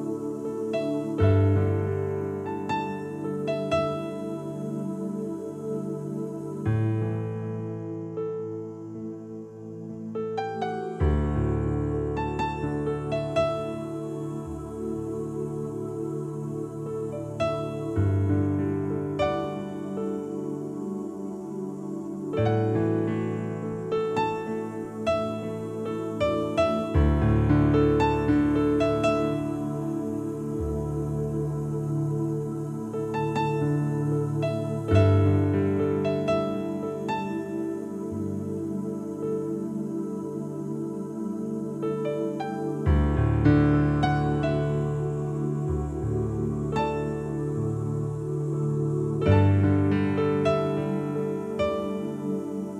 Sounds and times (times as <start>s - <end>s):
Music: 0.0s - 52.7s.